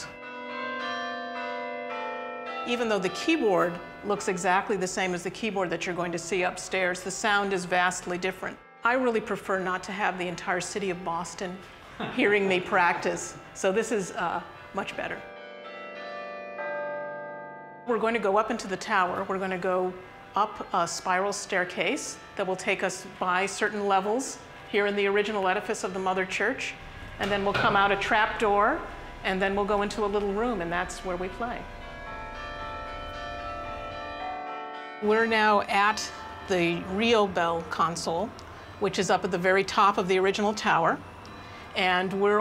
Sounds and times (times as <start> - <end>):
Change ringing (campanology): 0.0 - 42.4.